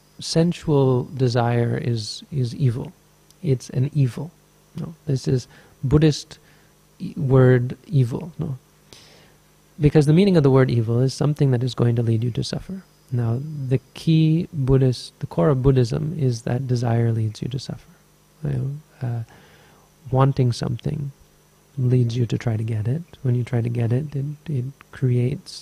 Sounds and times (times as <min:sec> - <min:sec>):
Speech: 0:00.2 - 0:06.4, 0:07.0 - 0:08.6, 0:09.8 - 0:19.3, 0:20.0 - 0:21.2, 0:21.8 - 0:25.6.